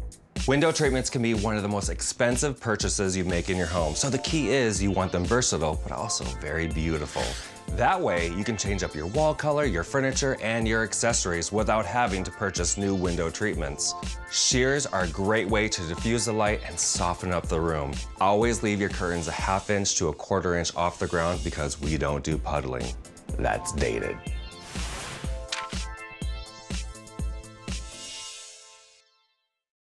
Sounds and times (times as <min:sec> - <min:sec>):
Music: 0:00.0 - 0:29.7
Speech: 0:00.5 - 0:24.2.